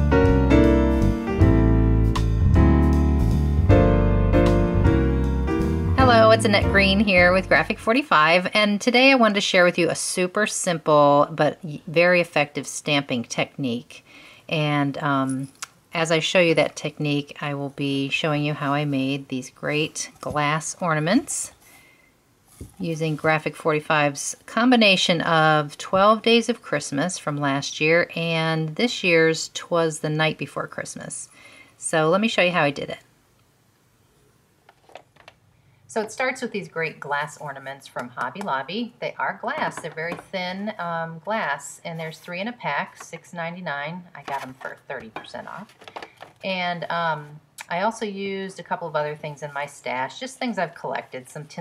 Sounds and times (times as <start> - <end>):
Speech: 6.0 - 21.5, 22.8 - 33.1, 35.9 - 45.7, 46.4 - 51.6.